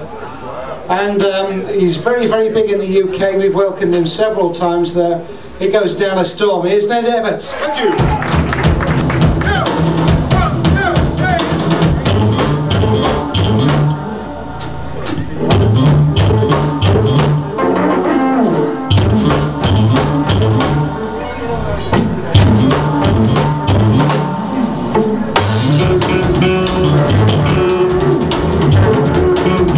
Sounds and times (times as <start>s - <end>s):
Strum: 8.6s - 29.7s.